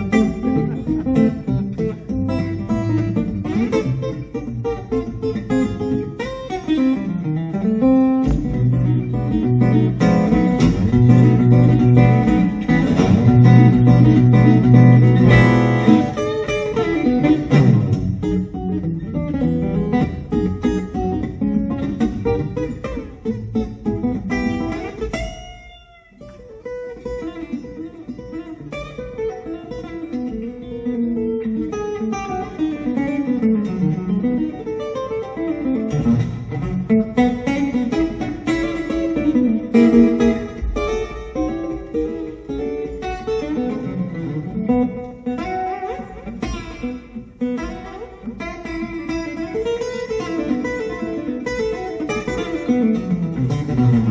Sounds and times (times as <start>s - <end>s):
Blues: 0.0s - 54.1s
Strum: 0.0s - 54.1s.